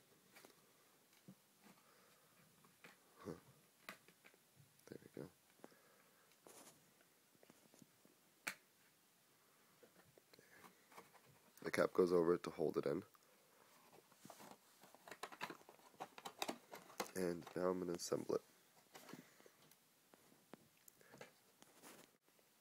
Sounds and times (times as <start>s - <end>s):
Inside, small room: 0.0s - 22.6s
Speech: 4.9s - 5.3s, 11.6s - 13.1s, 17.1s - 18.4s.